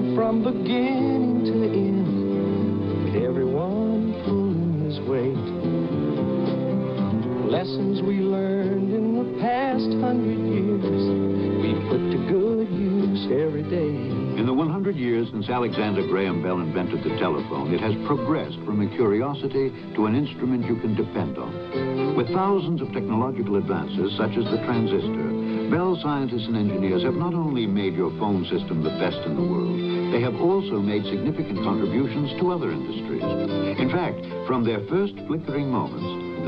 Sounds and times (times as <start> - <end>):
Music: 0.0 - 36.4
Speech: 3.1 - 3.8, 7.4 - 8.4, 9.4 - 36.4.